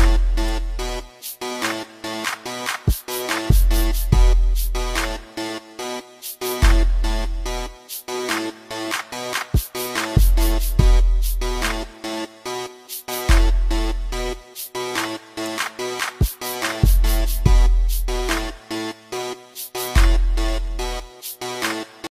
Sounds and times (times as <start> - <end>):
Soundtrack music: 0.0 - 22.1.